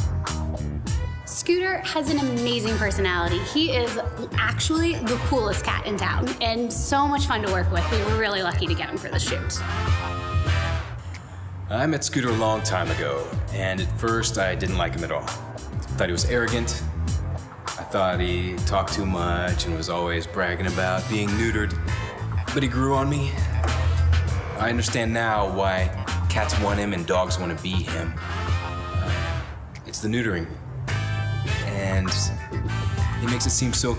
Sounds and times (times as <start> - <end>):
Music: 0.0 - 11.5, 12.1 - 29.7, 30.7 - 33.9
Speech: 1.3 - 9.6, 11.7 - 15.3, 15.9 - 16.8, 17.8 - 21.8, 22.5 - 23.4, 24.6 - 28.1, 31.7 - 32.4.